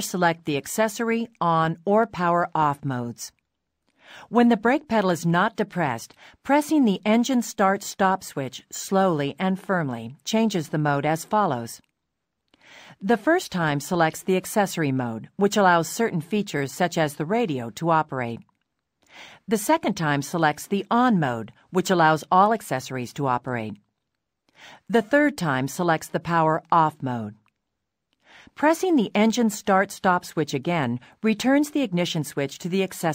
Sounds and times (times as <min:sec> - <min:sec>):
Speech: 0:00.0 - 0:03.4, 0:04.3 - 0:11.8, 0:13.0 - 0:18.5, 0:19.5 - 0:23.8, 0:24.9 - 0:27.4, 0:28.6 - 0:33.1.